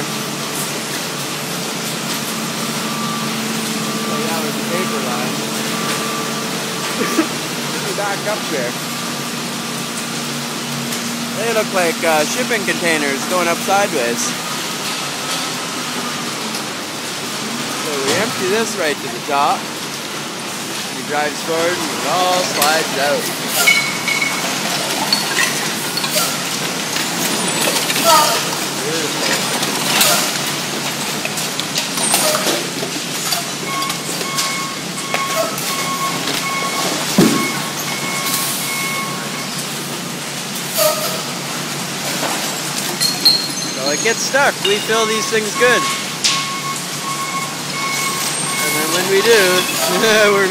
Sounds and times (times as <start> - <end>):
Speech: 4.1 - 5.4, 7.8 - 8.8, 11.4 - 14.4, 17.8 - 19.6, 20.9 - 23.3, 28.0 - 29.5, 43.8 - 45.9, 48.6 - 50.5.